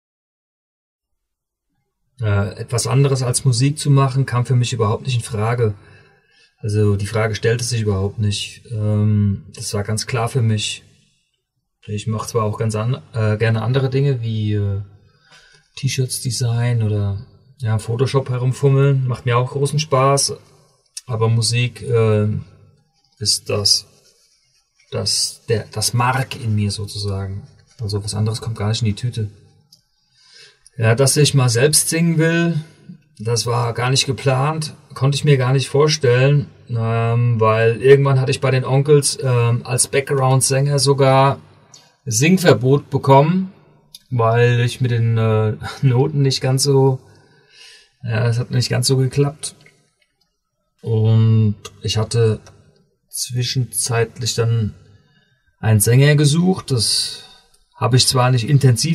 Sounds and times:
Speech: 0:02.2 - 0:06.0, 0:06.6 - 0:10.9, 0:11.8 - 0:14.9, 0:15.8 - 0:22.5, 0:23.2 - 0:24.0, 0:24.9 - 0:29.4, 0:30.8 - 0:41.4, 0:42.1 - 0:47.1, 0:48.0 - 0:49.7, 0:50.8 - 0:52.5, 0:53.1 - 0:54.8, 0:55.6 - 0:58.9.

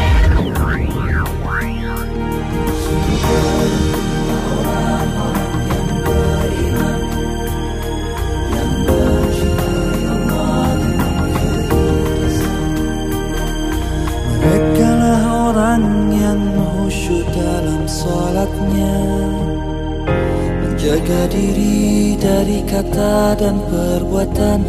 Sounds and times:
Music: 0:00.0 - 0:24.6.

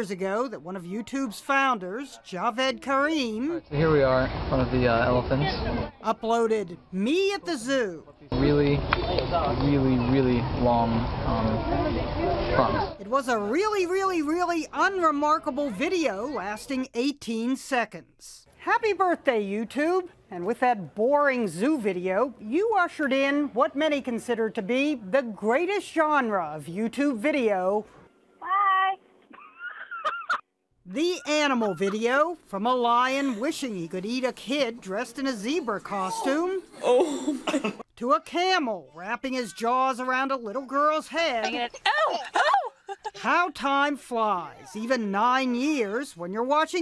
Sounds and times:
Outside, urban or manmade: 0:00.0 - 0:46.8.

